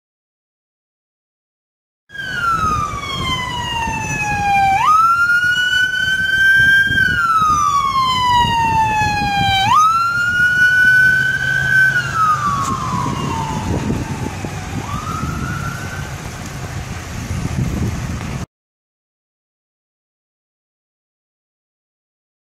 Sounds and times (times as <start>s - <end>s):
Police car (siren): 2.1s - 16.6s.